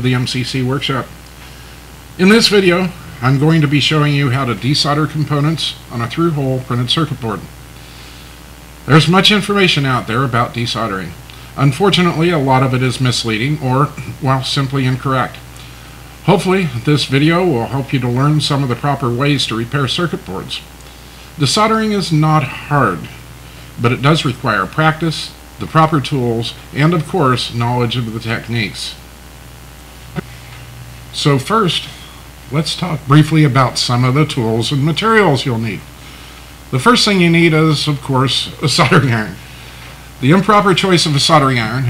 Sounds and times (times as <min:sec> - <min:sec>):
Speech: 0:00.0 - 0:01.2, 0:02.2 - 0:07.6, 0:08.8 - 0:15.4, 0:16.2 - 0:20.7, 0:21.4 - 0:23.2, 0:23.8 - 0:29.0, 0:31.1 - 0:35.9, 0:36.7 - 0:39.4, 0:40.2 - 0:41.9.